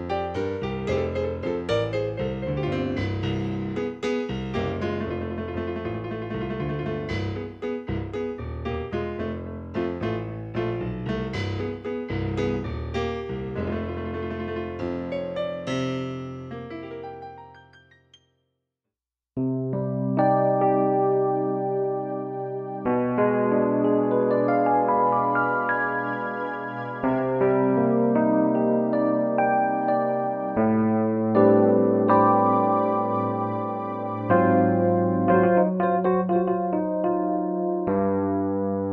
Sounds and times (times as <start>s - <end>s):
Music: 0.0s - 18.6s, 19.4s - 38.9s.